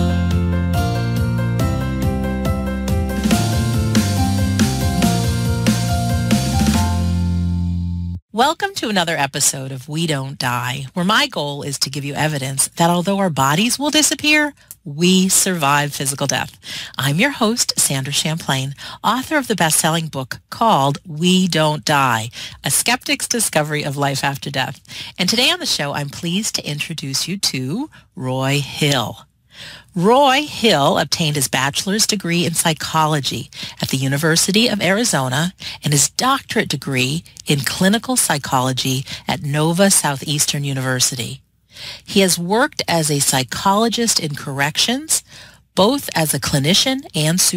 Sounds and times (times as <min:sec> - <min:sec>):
Speech: 0:08.4 - 0:29.3, 0:29.9 - 0:41.4, 0:42.0 - 0:47.5.